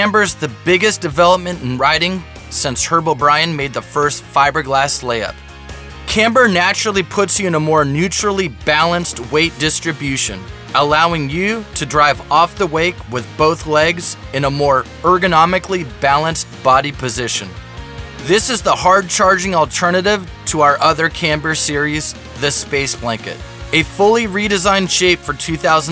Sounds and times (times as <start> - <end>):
Speech: 0.0 - 5.3, 6.1 - 17.6, 18.2 - 25.9
Music: 0.0 - 25.9.